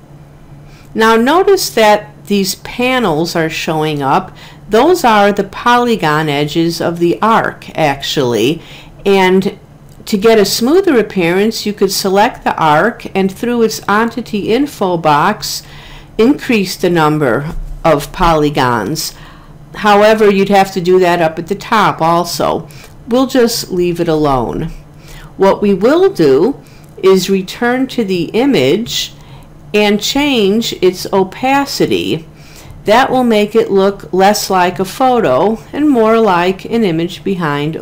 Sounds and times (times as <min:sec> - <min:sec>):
Narration, monologue: 0:00.0 - 0:37.8.